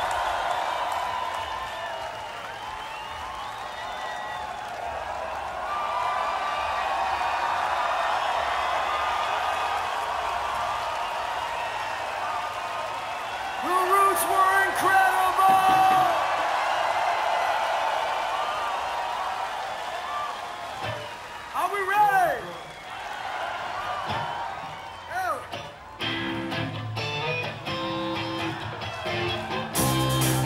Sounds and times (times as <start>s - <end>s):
Speech: 13.6s - 16.2s, 21.6s - 22.5s
Music: 25.1s - 30.4s.